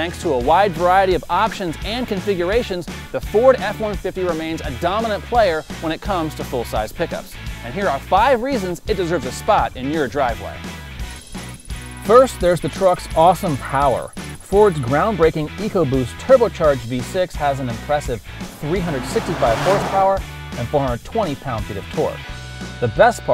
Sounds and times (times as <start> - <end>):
Speech: 0.0 - 10.6, 12.0 - 22.2, 22.8 - 23.3
Music: 0.0 - 23.3.